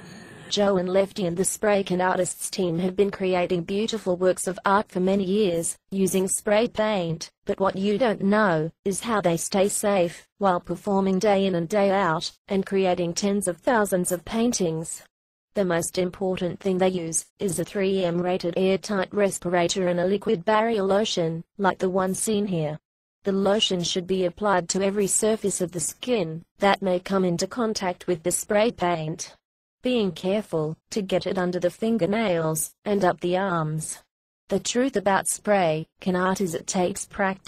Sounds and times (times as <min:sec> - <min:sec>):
Speech: 0:00.0 - 0:37.4.